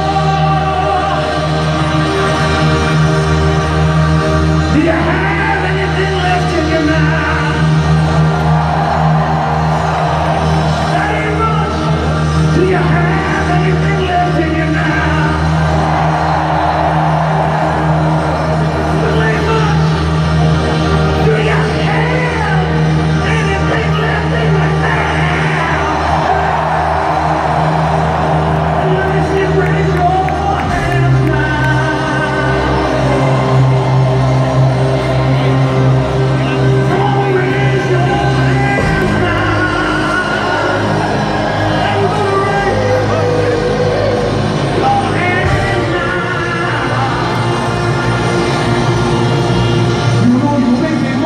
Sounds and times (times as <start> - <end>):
Music: 0.0 - 51.2.